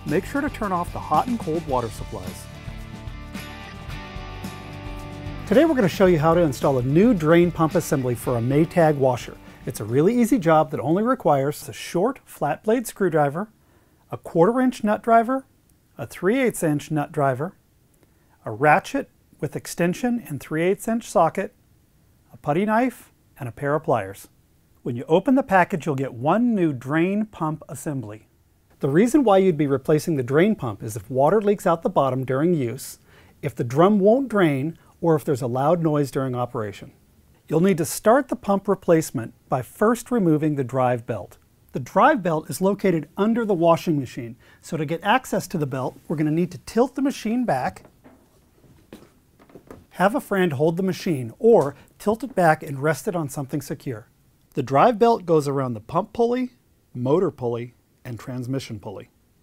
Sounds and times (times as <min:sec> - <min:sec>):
Music: 0:00.0 - 0:09.9
Speech: 0:00.1 - 0:02.5, 0:05.5 - 0:13.5, 0:14.1 - 0:17.6, 0:18.4 - 0:21.6, 0:22.3 - 0:47.9, 0:49.9 - 0:59.2.